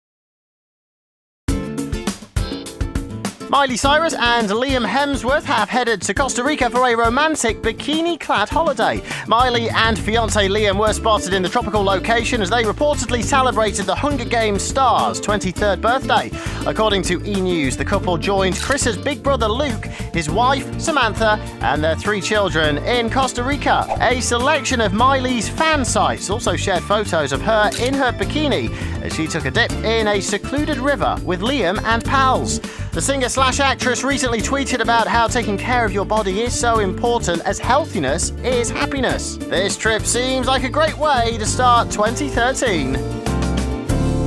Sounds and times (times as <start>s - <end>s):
Music: 1.5s - 44.2s
Speech: 3.5s - 43.0s.